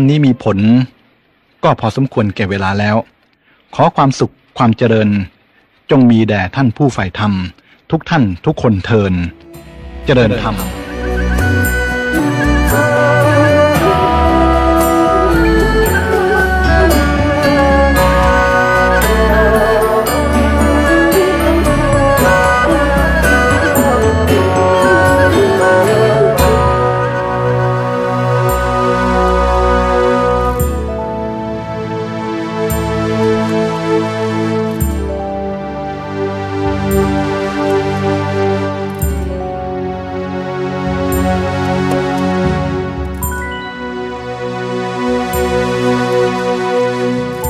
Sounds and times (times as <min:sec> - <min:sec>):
Speech: 0:00.0 - 0:01.0, 0:01.6 - 0:03.1, 0:03.7 - 0:09.4, 0:10.1 - 0:10.7
Music: 0:09.1 - 0:47.5.